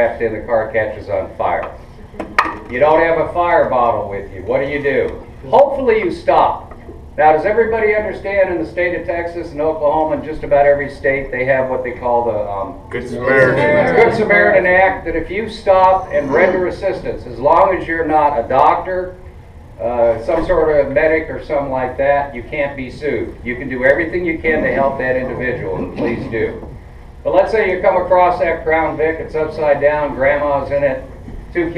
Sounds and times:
Speech: 0.0 - 1.8, 2.7 - 19.2, 19.8 - 31.7.

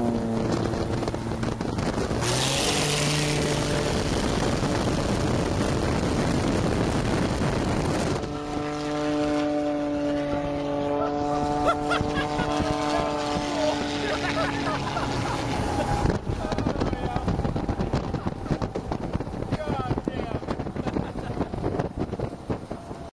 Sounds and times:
Vehicle: 0.0 - 23.1
Speech: 19.5 - 20.4.

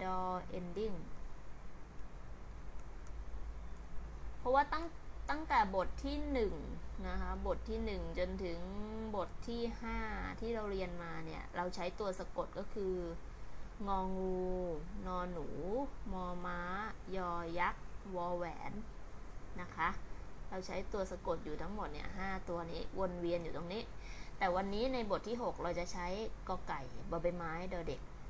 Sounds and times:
Speech: 0.0 - 1.1, 4.4 - 13.2, 13.8 - 18.9, 19.6 - 28.0.

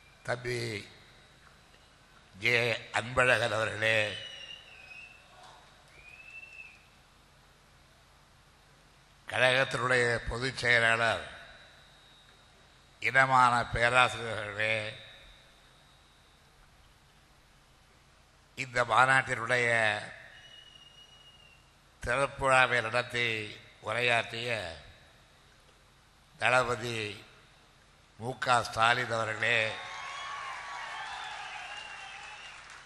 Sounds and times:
Narration, monologue: 0.0 - 5.0, 6.8 - 20.8, 21.4 - 29.9
Male speech, man speaking: 0.3 - 0.9, 2.4 - 4.3, 9.3 - 11.5, 13.0 - 15.0, 18.6 - 20.2, 22.0 - 24.9, 26.4 - 27.3, 28.2 - 29.8.

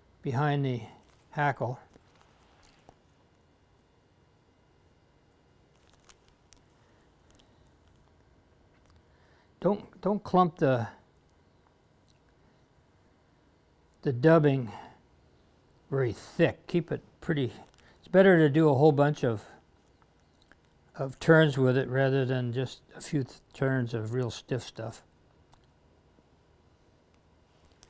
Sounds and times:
Speech: 0.2 - 1.9, 9.6 - 11.0, 14.0 - 15.0, 15.9 - 19.6, 20.9 - 25.1.

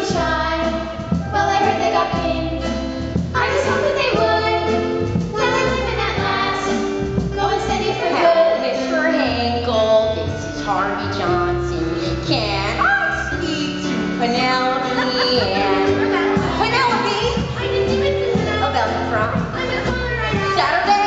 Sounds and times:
Music: 0.0 - 21.0.

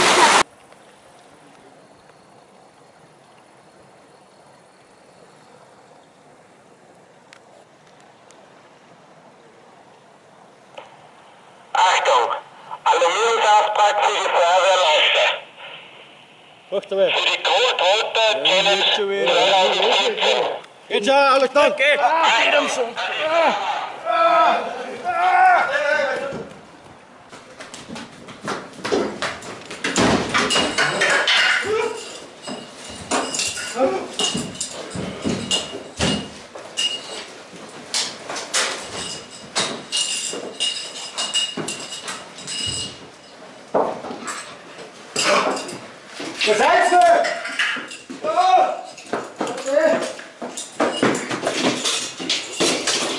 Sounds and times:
Speech: 11.8 - 15.4, 16.7 - 26.5, 46.4 - 47.4, 48.2 - 48.9, 49.5 - 50.2.

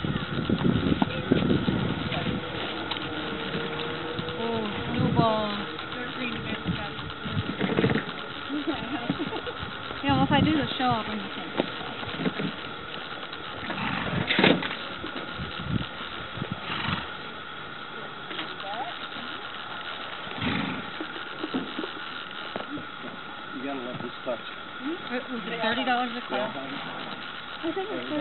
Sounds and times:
Horse: 0.0 - 17.4, 18.3 - 23.2.

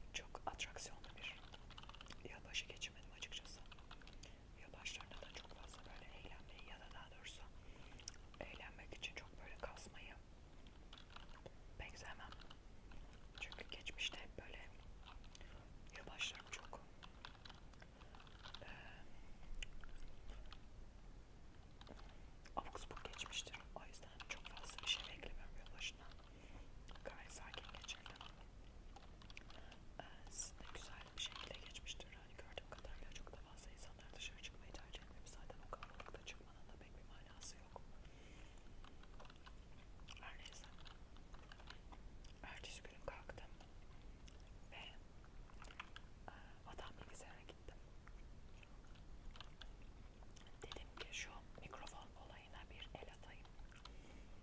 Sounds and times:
Whispering: 0.0 - 10.2, 11.1 - 17.5, 18.1 - 20.6, 21.9 - 26.3, 26.9 - 28.5, 29.4 - 37.9, 40.1 - 41.0, 41.6 - 43.7, 44.6 - 45.0, 45.9 - 47.8, 50.4 - 53.5
Computer keyboard: 0.9 - 7.1, 10.6 - 18.8, 19.8 - 20.6, 21.7 - 26.3, 26.9 - 33.4, 34.8 - 36.4, 38.8 - 39.6, 40.2 - 43.0, 45.5 - 46.1, 48.8 - 49.7, 50.4 - 52.0.

